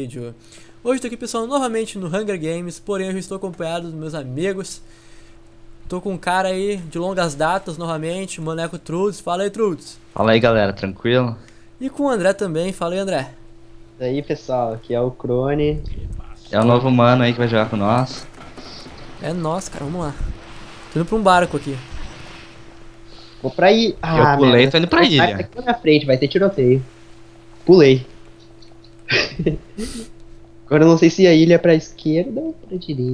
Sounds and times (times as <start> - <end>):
Speech: 0.0 - 4.8, 5.9 - 13.4, 14.0 - 20.3, 21.0 - 21.9, 23.4 - 26.9, 27.6 - 28.1, 30.7 - 33.1.